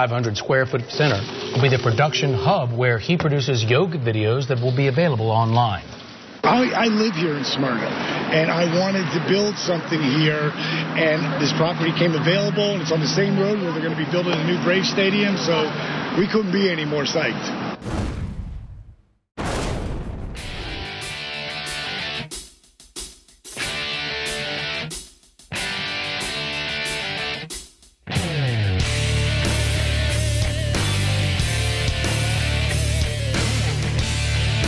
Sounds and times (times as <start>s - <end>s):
Speech: 0.0s - 17.6s.